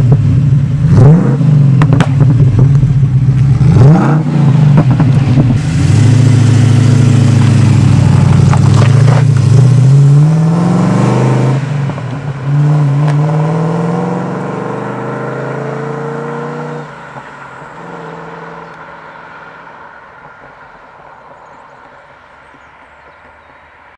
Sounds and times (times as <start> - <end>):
Car: 0.0 - 23.9
Accelerating, revving, vroom: 0.8 - 2.2, 3.5 - 17.0.